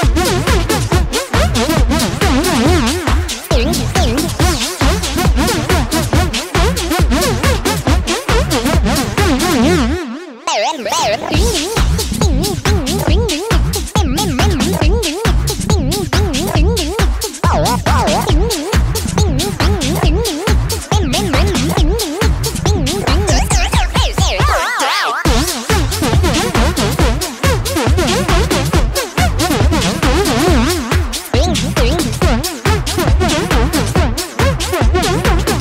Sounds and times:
Music: 0.0 - 35.6.

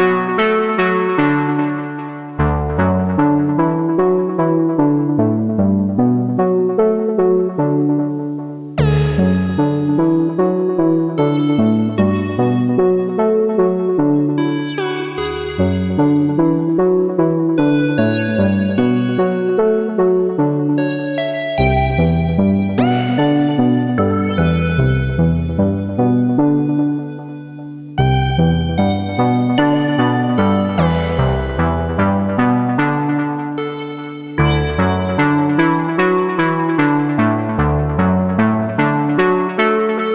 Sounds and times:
Synthesizer: 0.0 - 40.1.

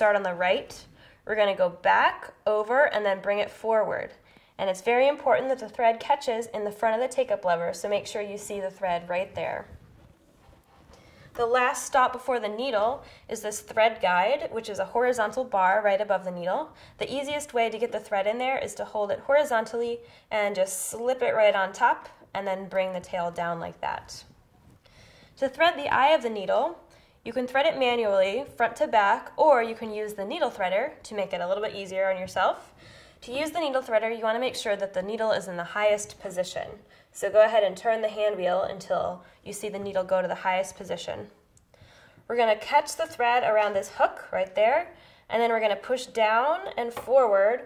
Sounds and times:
Speech: 0.0 - 9.7, 11.4 - 24.3, 25.4 - 41.4, 42.3 - 47.6.

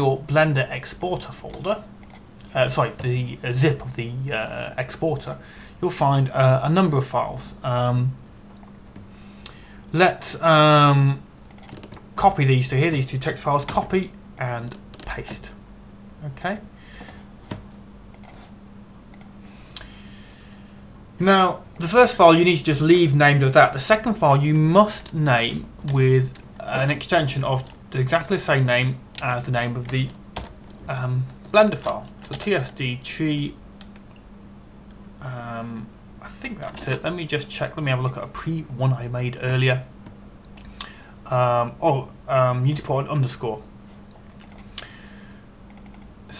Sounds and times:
Speech: 0.0 - 1.9, 2.5 - 8.2, 9.9 - 11.2, 12.2 - 15.6, 16.2 - 16.7, 21.2 - 30.2, 30.9 - 33.6, 35.2 - 39.9, 41.3 - 43.7.

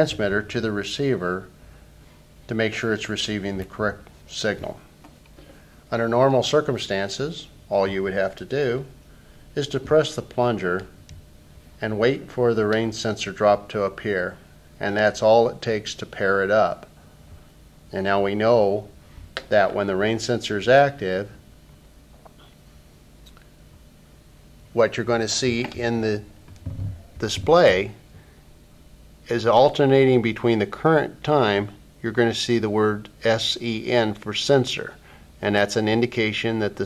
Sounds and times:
Speech: 0.0 - 1.5, 2.5 - 4.9, 5.9 - 9.0, 9.6 - 11.0, 11.8 - 16.9, 17.9 - 21.4, 24.7 - 26.3, 27.2 - 28.0, 29.3 - 36.8.

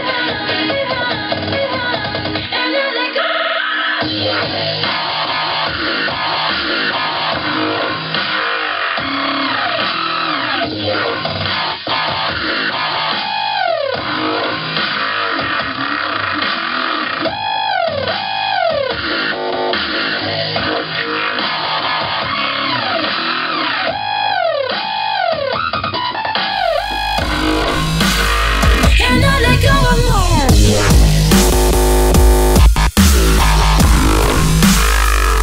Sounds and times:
Music: 0.0 - 35.4.

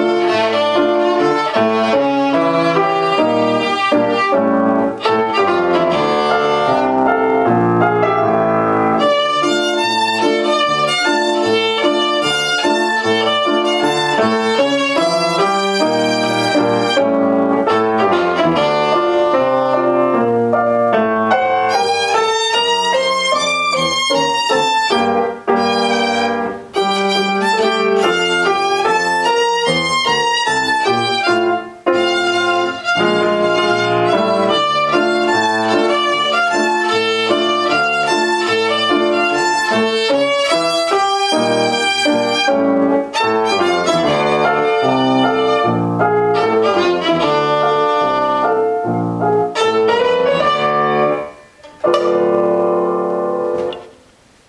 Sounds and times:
Violin, fiddle: 0.0 - 7.4, 8.0 - 20.1, 21.4 - 48.8, 49.4 - 51.8.

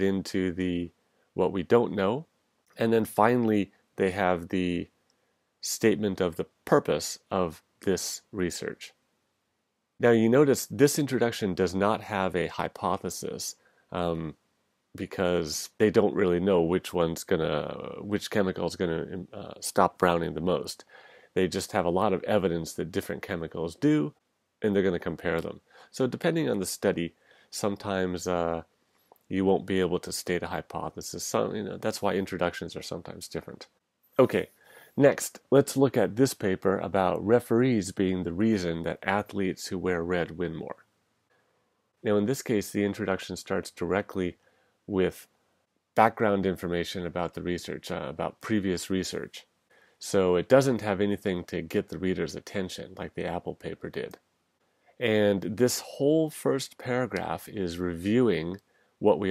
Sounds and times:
Speech: 0.0 - 5.0, 5.6 - 9.0, 10.0 - 14.4, 15.0 - 28.7, 29.3 - 40.9, 42.0 - 45.3, 46.0 - 54.2, 55.0 - 59.3.

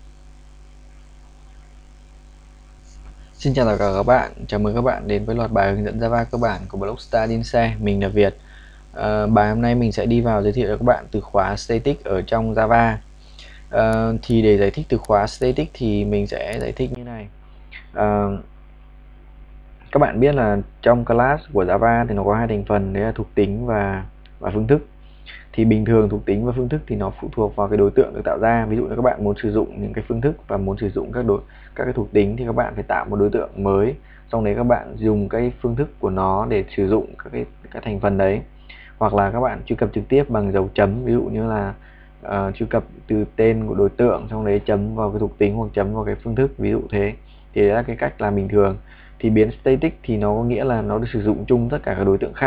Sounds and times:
Speech: 3.4 - 18.5, 19.9 - 52.4.

